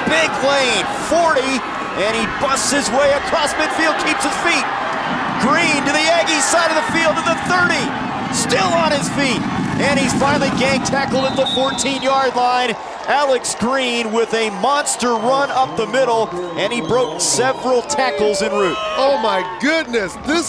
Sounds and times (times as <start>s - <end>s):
Speech: 0.0s - 4.7s, 5.4s - 20.4s.